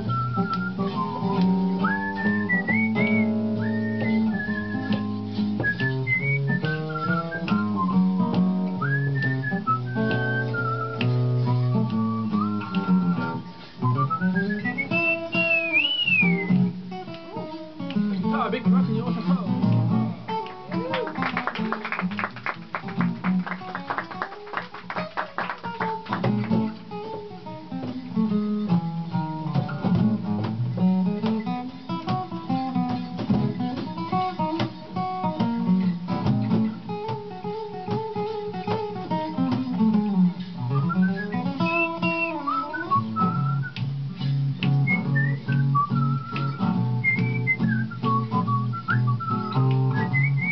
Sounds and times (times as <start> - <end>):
Whistling: 0.0 - 16.7, 40.7 - 43.8, 44.7 - 50.5.